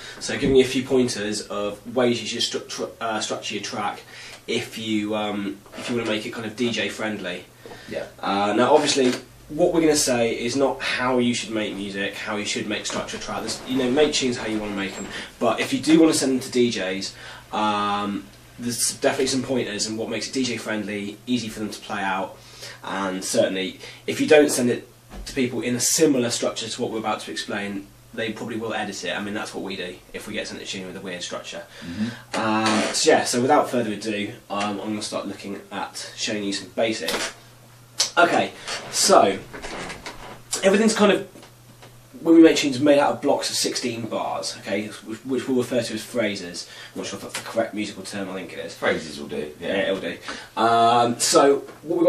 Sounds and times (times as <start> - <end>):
Speech: 0.2 - 37.4, 38.0 - 39.8, 40.6 - 41.4, 42.2 - 52.0.